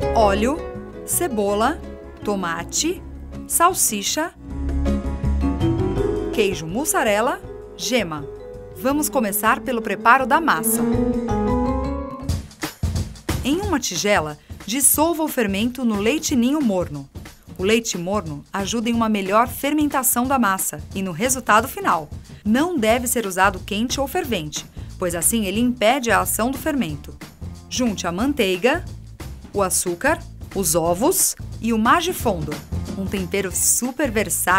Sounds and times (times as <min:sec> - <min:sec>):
Music: 0:00.0 - 0:34.5
Speech: 0:00.2 - 0:04.4, 0:06.4 - 0:10.8, 0:13.4 - 0:28.9, 0:29.6 - 0:34.5.